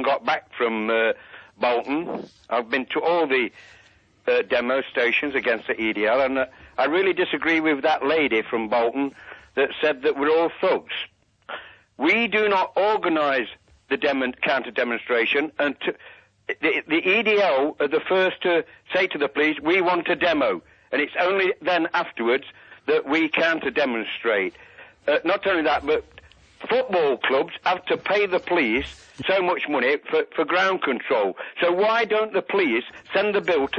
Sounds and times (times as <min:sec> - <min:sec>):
Speech: 0:00.0 - 0:11.2, 0:12.0 - 0:33.7
Radio: 0:00.0 - 0:33.7.